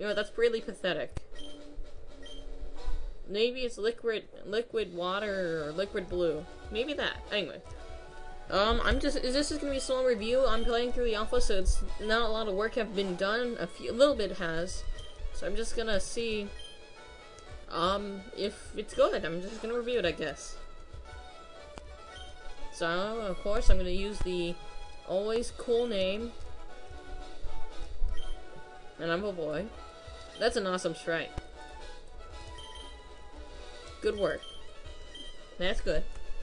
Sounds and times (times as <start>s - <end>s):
Speech: 0.0s - 1.2s, 3.3s - 7.6s, 8.5s - 14.8s, 15.4s - 16.5s, 17.7s - 20.6s, 22.8s - 26.4s, 29.0s - 29.7s, 30.4s - 31.4s, 34.0s - 34.4s, 35.6s - 36.1s
Music: 0.0s - 36.4s.